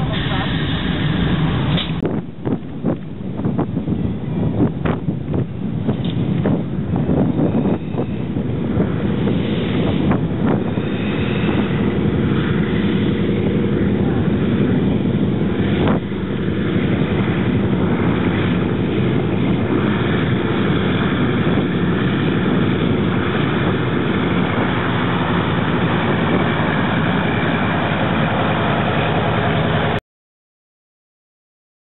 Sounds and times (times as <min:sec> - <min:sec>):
Wind noise (microphone): 0:00.0 - 0:28.2.